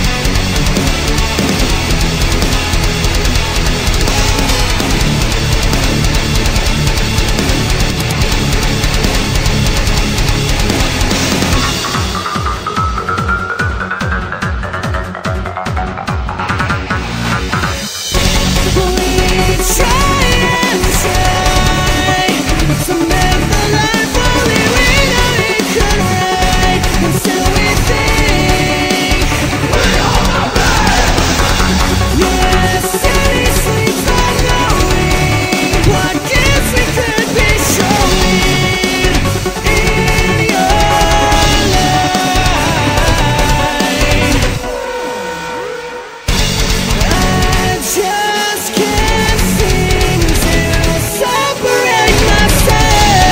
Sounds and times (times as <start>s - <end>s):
Music: 0.0s - 53.3s.